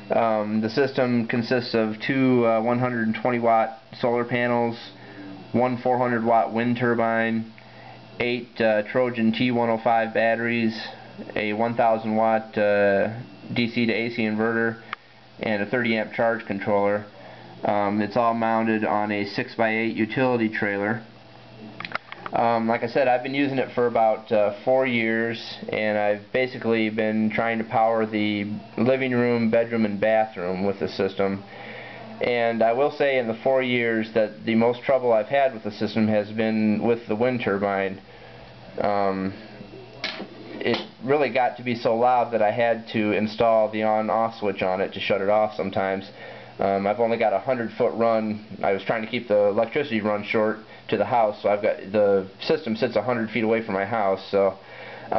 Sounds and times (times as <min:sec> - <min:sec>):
Speech: 0:00.0 - 0:07.5, 0:08.2 - 0:21.2, 0:22.1 - 0:38.0, 0:38.8 - 0:55.1.